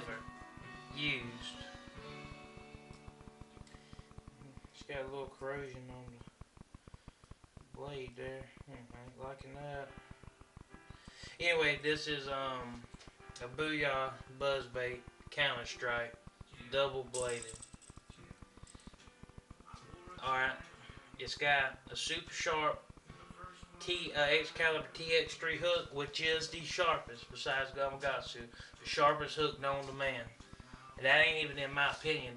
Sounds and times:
Speech: 0.0 - 0.2, 0.9 - 1.6, 4.4 - 6.3, 7.8 - 10.0, 11.4 - 12.8, 13.4 - 17.5, 19.7 - 30.4, 31.0 - 32.3.

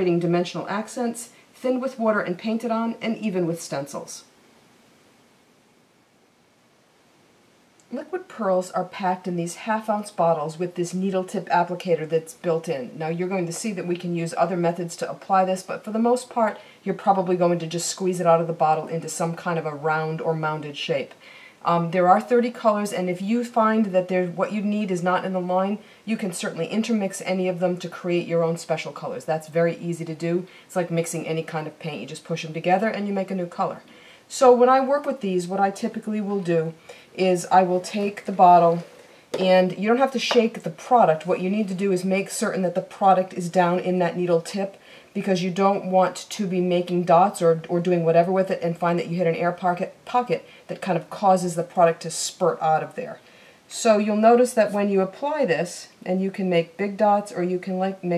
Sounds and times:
Speech: 0.0 - 4.3, 7.9 - 58.1.

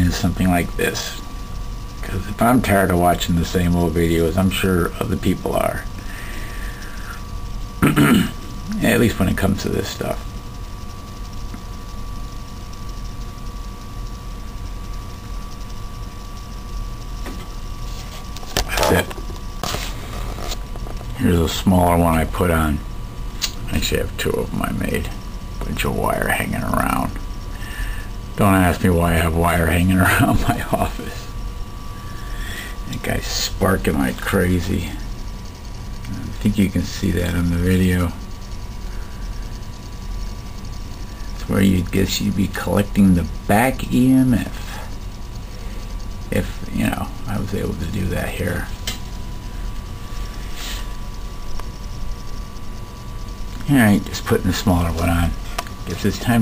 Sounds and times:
Speech: 0.0 - 1.2, 2.0 - 5.9, 7.9 - 10.2, 18.7 - 19.1, 21.2 - 22.8, 23.7 - 27.2, 28.4 - 31.3, 32.9 - 35.0, 36.1 - 38.2, 41.4 - 44.8, 46.3 - 48.8, 53.6 - 56.4.

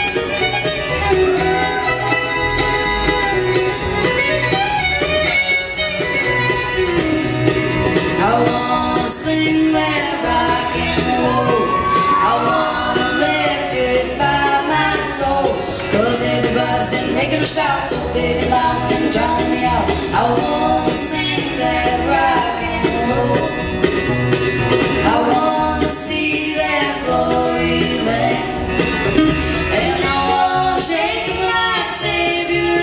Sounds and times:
Rock and roll: 0.0 - 32.8.

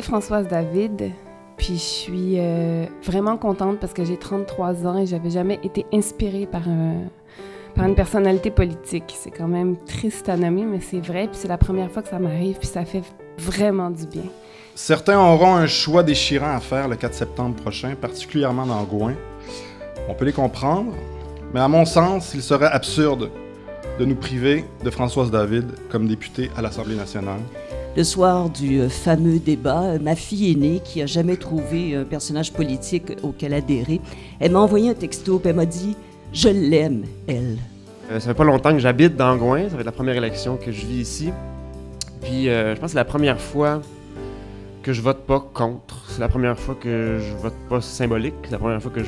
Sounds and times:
Music: 0.0 - 49.0
Speech: 7.8 - 19.2, 21.6 - 23.3, 24.0 - 41.3, 42.3 - 43.8, 44.9 - 49.0.

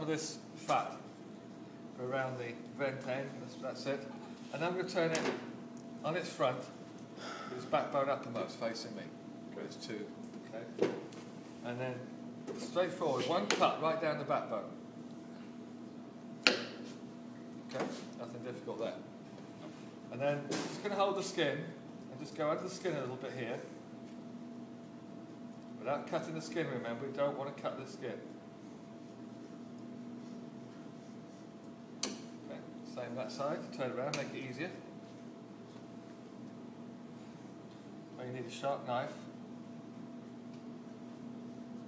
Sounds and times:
Speech: 0.0 - 1.1, 2.0 - 5.4, 6.0 - 6.8, 7.5 - 10.8, 11.6 - 14.8, 17.7 - 19.1, 20.1 - 23.7, 25.8 - 28.3, 32.5 - 34.9, 38.2 - 39.3.

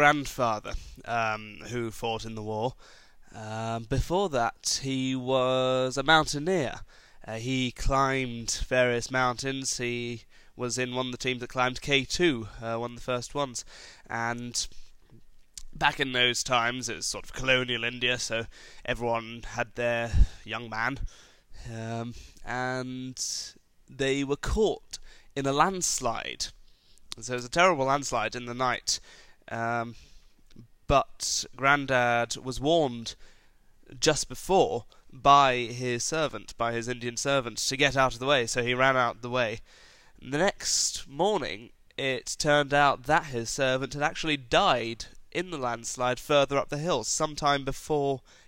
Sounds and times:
Male speech, man speaking: 0.0 - 2.8, 3.4 - 14.7, 15.7 - 21.0, 21.6 - 26.6, 27.2 - 30.0, 30.9 - 33.2, 33.9 - 39.6, 40.2 - 48.2
Narration, monologue: 0.0 - 48.4.

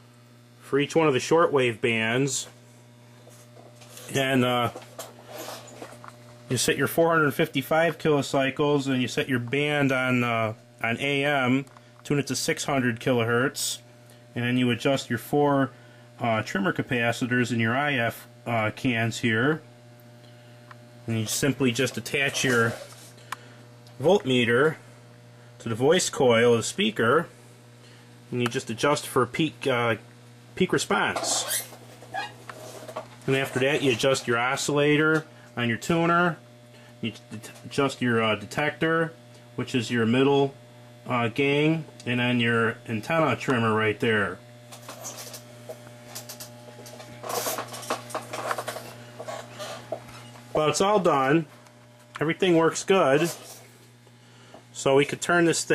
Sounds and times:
Speech: 0.6 - 2.6, 4.1 - 4.8, 6.5 - 19.7, 21.1 - 22.9, 24.0 - 24.8, 25.6 - 27.4, 28.3 - 31.6, 33.3 - 36.4, 37.0 - 44.4, 50.6 - 51.5, 52.2 - 53.5, 54.8 - 55.7.

